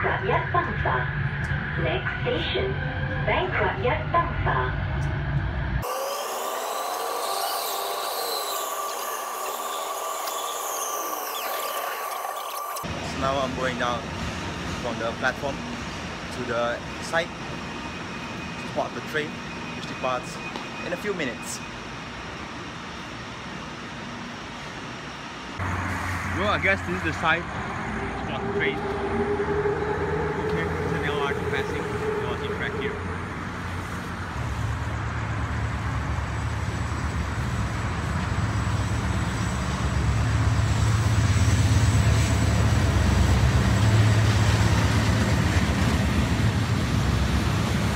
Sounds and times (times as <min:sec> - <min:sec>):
Outside, urban or manmade: 0:00.0 - 0:47.9
Train: 0:00.0 - 0:47.9
Speech: 0:26.4 - 0:27.5.